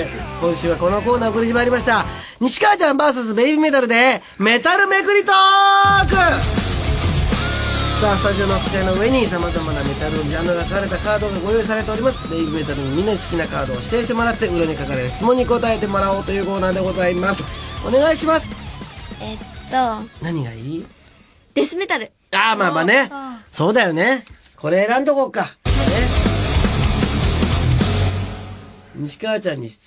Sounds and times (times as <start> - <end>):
Music: 0.0 - 2.3, 5.9 - 21.2, 25.6 - 29.2
Speech: 8.0 - 18.5, 22.4 - 26.2, 29.0 - 29.8.